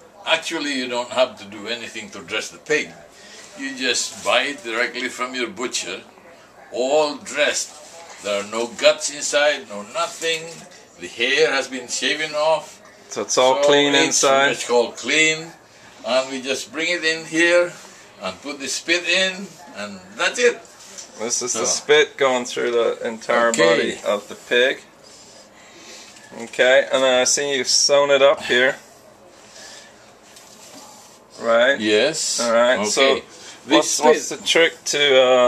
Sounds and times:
Speech: 0:00.0 - 0:24.9, 0:30.8 - 0:35.4.

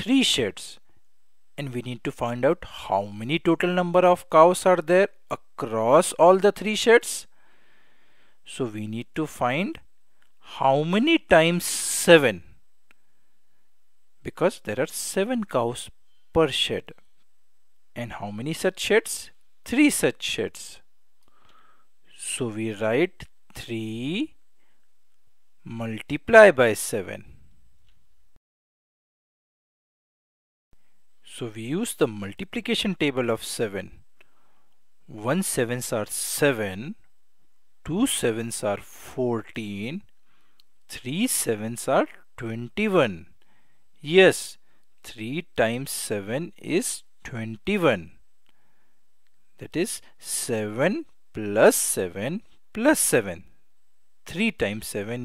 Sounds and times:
Speech: 0:00.0 - 0:00.8, 0:01.6 - 0:07.3, 0:08.4 - 0:12.6, 0:14.2 - 0:17.0, 0:18.0 - 0:20.9, 0:22.1 - 0:24.4, 0:25.6 - 0:27.4, 0:31.2 - 0:34.0, 0:35.1 - 0:37.0, 0:37.8 - 0:40.1, 0:40.9 - 0:43.3, 0:44.0 - 0:48.2, 0:49.6 - 0:53.6, 0:54.3 - 0:55.2.

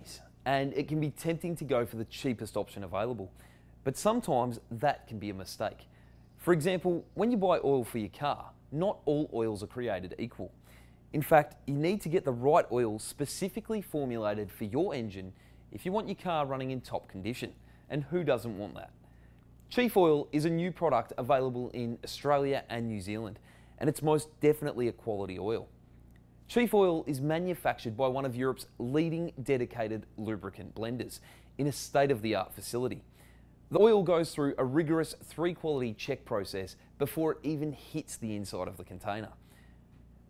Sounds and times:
Speech: 0:00.0 - 0:19.0, 0:19.7 - 0:25.7, 0:26.5 - 0:33.1, 0:33.7 - 0:39.4.

